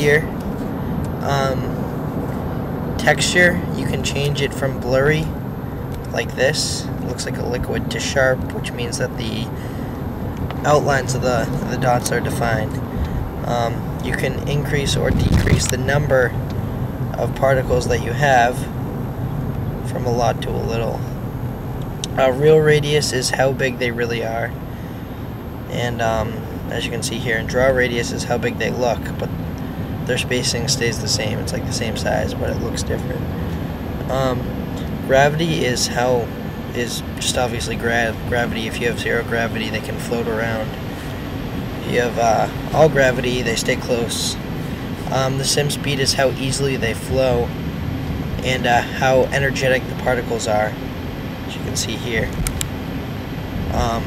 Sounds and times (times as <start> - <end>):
Speech: 0.0 - 0.4, 1.2 - 1.8, 3.0 - 5.4, 6.1 - 9.6, 10.6 - 12.8, 13.4 - 16.4, 17.2 - 18.7, 19.9 - 21.1, 22.1 - 24.6, 25.7 - 29.3, 30.1 - 33.2, 34.1 - 40.8, 41.8 - 44.4, 45.1 - 47.5, 48.4 - 50.8, 51.5 - 52.4, 53.7 - 54.0.